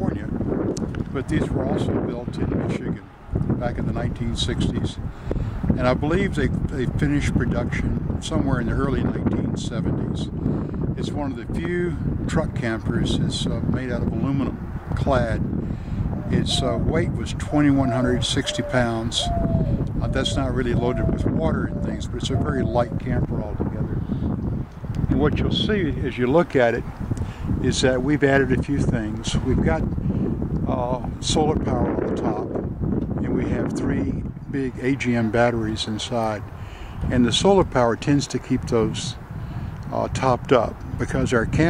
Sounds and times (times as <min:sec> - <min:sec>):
Speech: 0:00.0 - 0:00.4, 0:01.1 - 0:05.0, 0:05.8 - 0:10.3, 0:11.0 - 0:15.4, 0:16.3 - 0:19.3, 0:20.0 - 0:24.0, 0:25.1 - 0:26.8, 0:27.6 - 0:29.8, 0:30.7 - 0:32.5, 0:33.2 - 0:36.4, 0:37.1 - 0:39.2, 0:39.9 - 0:41.7.